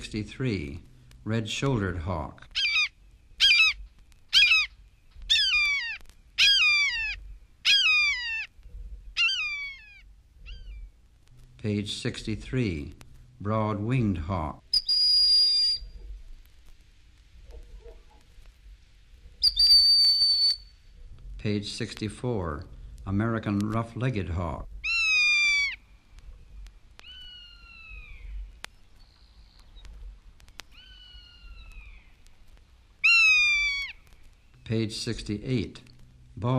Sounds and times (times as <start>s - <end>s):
Speech: 0.0s - 2.5s, 11.6s - 14.6s, 21.4s - 24.7s, 34.6s - 36.5s
Bird vocalization, bird call, bird song: 4.4s - 10.9s, 27.1s - 32.2s.